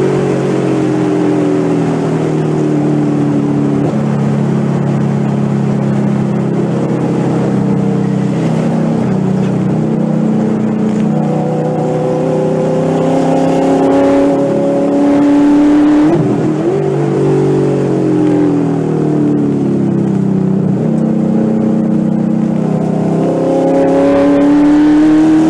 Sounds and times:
Accelerating, revving, vroom: 0.0 - 19.0, 20.8 - 25.5
Car: 0.0 - 25.5
Medium engine (mid frequency): 0.0 - 25.5.

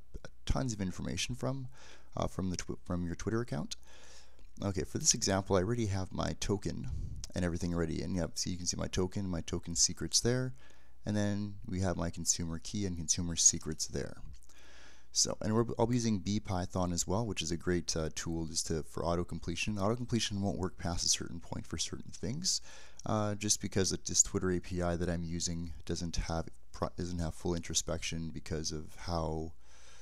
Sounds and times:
Speech: 0.1 - 3.8, 4.6 - 14.4, 15.2 - 29.6.

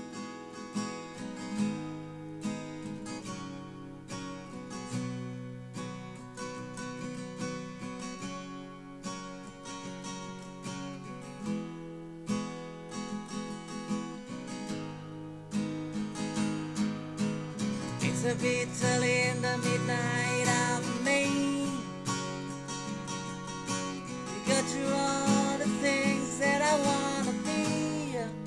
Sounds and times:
Strum: 0.0 - 28.4.

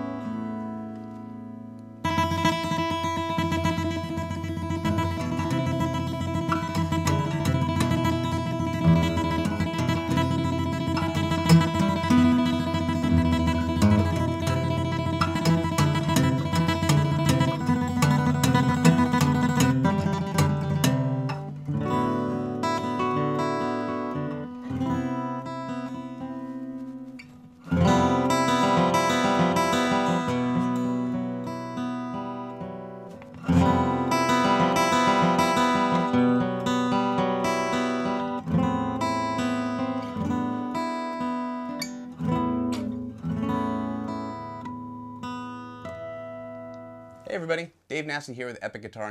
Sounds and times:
Acoustic guitar: 0.0 - 49.1.

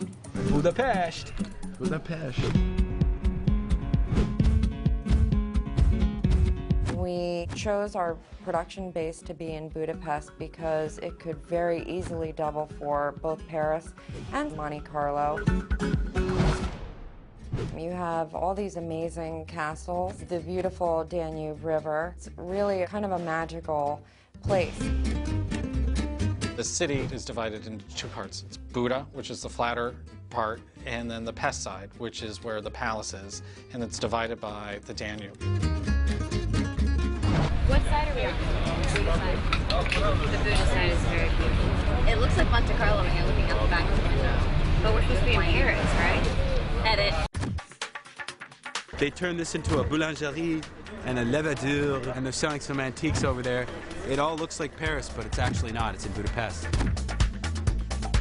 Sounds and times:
Music: 0.0 - 58.2
Speech: 26.6 - 35.3, 49.0 - 56.7.

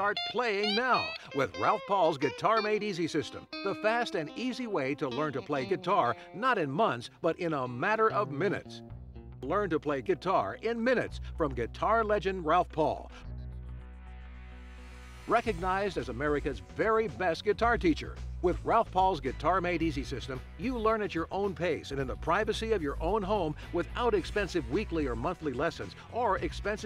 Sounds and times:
Speech: 0.0 - 8.8, 9.4 - 13.1, 15.3 - 26.8
Guitar: 0.0 - 26.8.

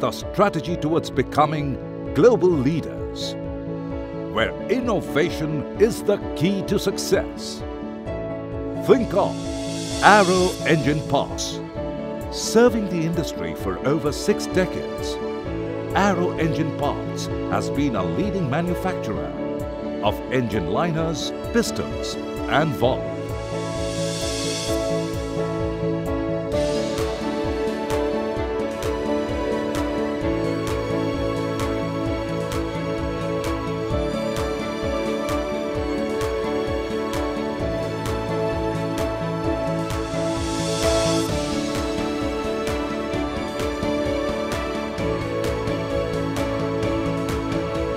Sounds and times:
Speech: 0.0 - 3.4, 4.4 - 7.6, 8.8 - 9.4, 10.0 - 11.6, 12.4 - 15.2, 16.0 - 19.3, 20.0 - 23.0
Music: 0.0 - 47.9.

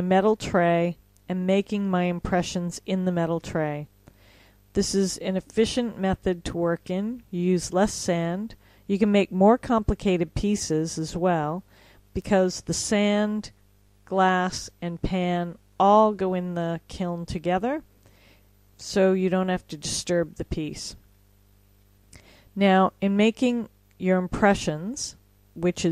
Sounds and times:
Speech: 0.0 - 3.9, 4.8 - 11.6, 12.2 - 17.9, 18.8 - 21.0, 22.6 - 25.9.

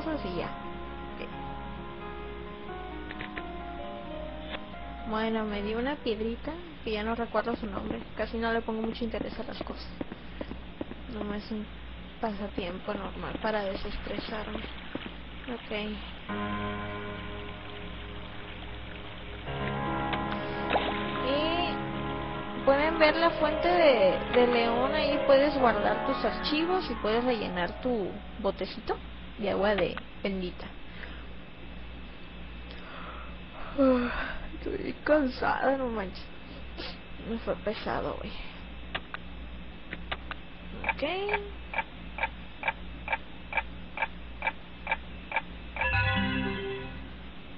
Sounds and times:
Speech: 0.0 - 0.6, 5.1 - 10.0, 11.1 - 14.6, 15.5 - 16.0, 21.2 - 21.8, 22.7 - 30.8, 33.7 - 36.3, 37.2 - 38.6, 40.8 - 41.6
Music: 0.0 - 6.6, 16.3 - 28.5, 45.8 - 47.5.

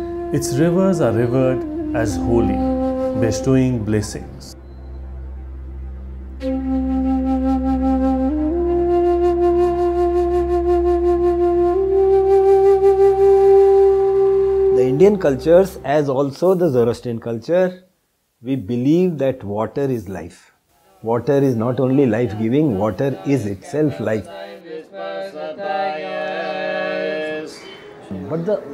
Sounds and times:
Speech: 0.4 - 4.6, 14.8 - 24.3.

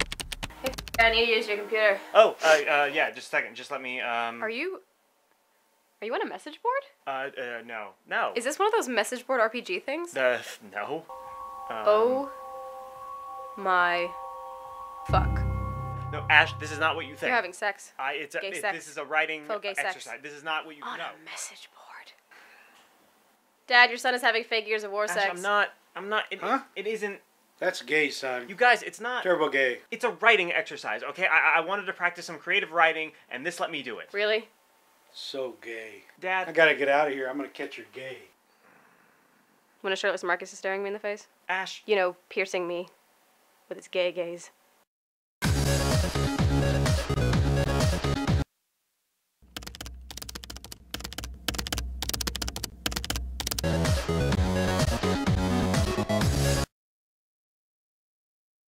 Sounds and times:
Speech: 2.3 - 4.1, 16.2 - 21.2, 23.7 - 34.4.

